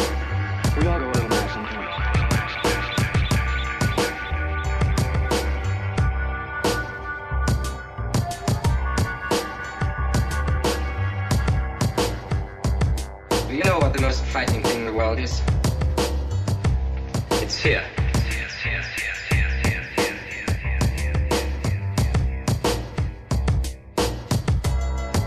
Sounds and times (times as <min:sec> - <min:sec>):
Music: 0:00.0 - 0:25.2
Speech: 0:00.7 - 0:02.0, 0:13.5 - 0:15.5, 0:17.3 - 0:18.9.